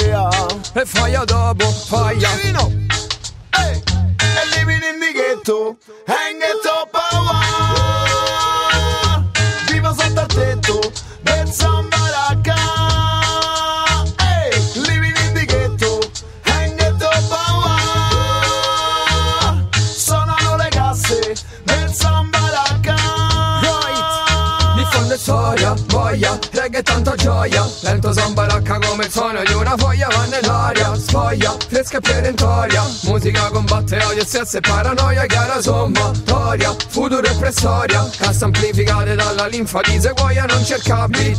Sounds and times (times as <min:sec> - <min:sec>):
Music: 0:00.0 - 0:41.3.